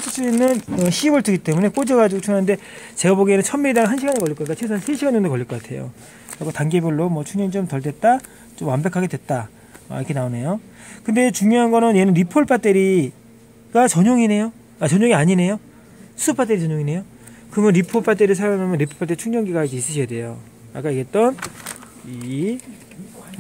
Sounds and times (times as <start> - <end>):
Speech: 0.0 - 15.6, 16.2 - 23.4.